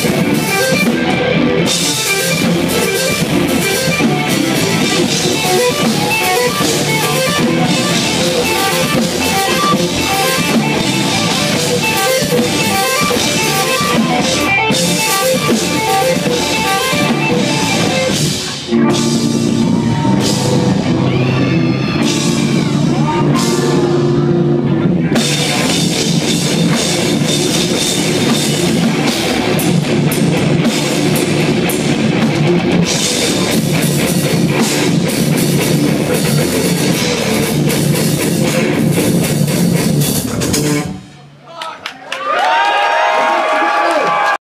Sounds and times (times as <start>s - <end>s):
Drum: 0.0s - 41.0s
Drum kit: 0.0s - 41.4s
Guitar: 0.0s - 41.4s
Heavy metal: 0.0s - 41.4s
Speech: 41.1s - 42.1s.